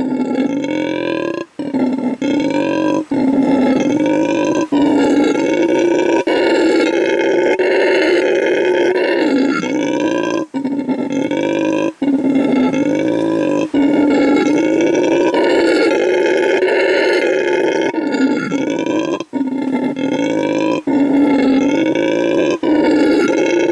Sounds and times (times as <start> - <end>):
Grunt: 0.0 - 23.7
Roar: 0.0 - 23.7.